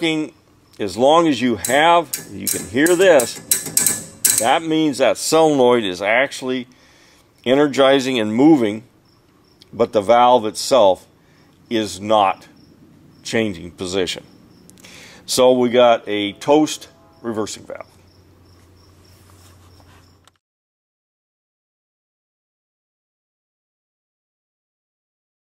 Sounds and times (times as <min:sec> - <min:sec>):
Speech: 0:00.0 - 0:03.4, 0:04.4 - 0:06.7, 0:07.4 - 0:08.9, 0:09.7 - 0:11.1, 0:11.7 - 0:12.5, 0:13.3 - 0:14.3, 0:15.3 - 0:18.0.